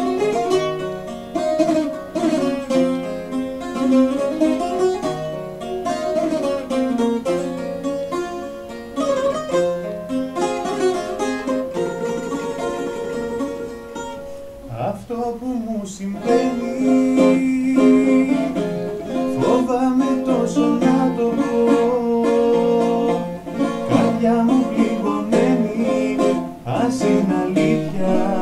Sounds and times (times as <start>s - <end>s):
Ukulele: 0.0s - 28.4s.